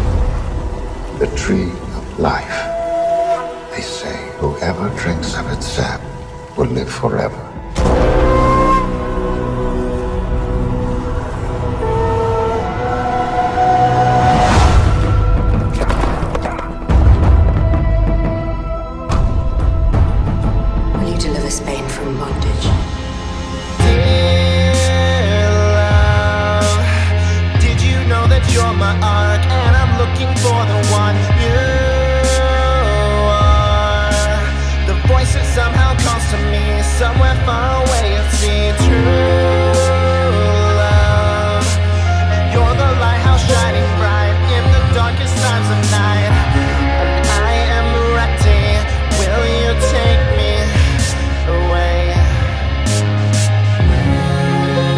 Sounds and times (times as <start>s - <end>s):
Soundtrack music: 0.0s - 54.9s
Speech: 1.2s - 2.7s, 3.7s - 6.0s, 6.6s - 7.6s, 21.0s - 22.8s.